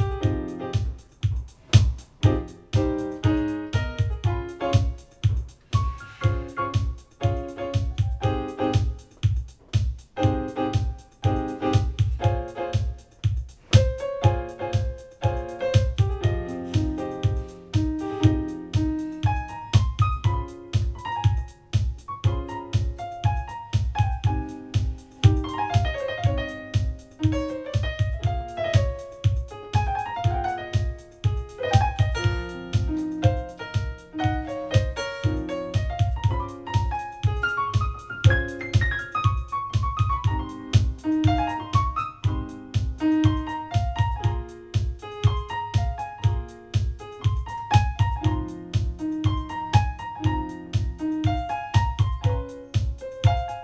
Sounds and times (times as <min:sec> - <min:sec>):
House music: 0:00.0 - 0:53.6.